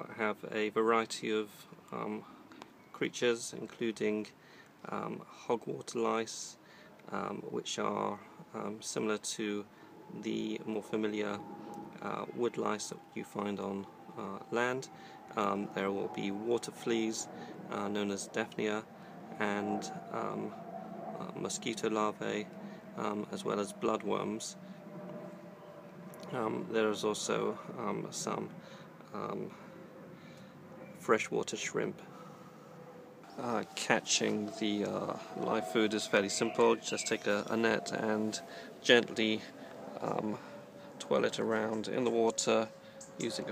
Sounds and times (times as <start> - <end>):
Speech: 0.0 - 2.3, 3.0 - 9.6, 10.2 - 11.4, 12.0 - 18.8, 19.4 - 20.6, 21.2 - 24.6, 26.3 - 28.5, 29.1 - 29.5, 31.0 - 32.0, 33.4 - 40.4, 41.0 - 43.5.